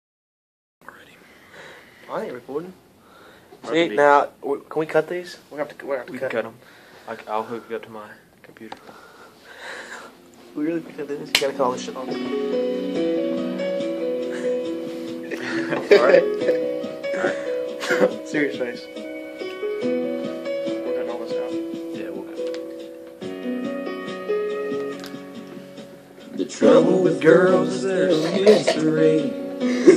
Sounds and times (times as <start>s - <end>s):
Male speech, man speaking: 2.1s - 2.8s, 3.6s - 8.8s, 10.6s - 12.2s, 15.9s - 16.2s, 18.2s - 18.9s, 20.8s - 22.4s.